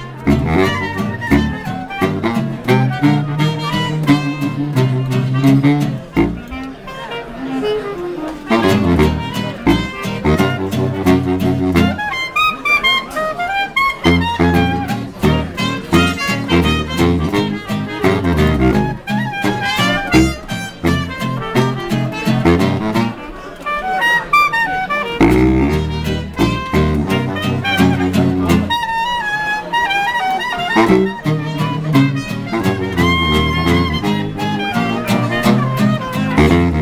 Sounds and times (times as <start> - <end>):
Music: 0.0 - 36.8
Speech: 0.0 - 36.8.